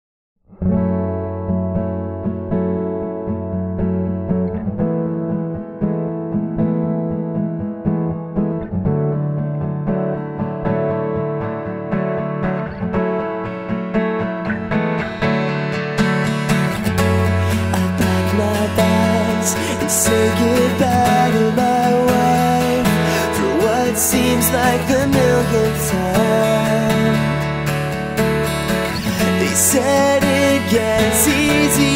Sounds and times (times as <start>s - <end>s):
Guitar: 0.4s - 31.9s.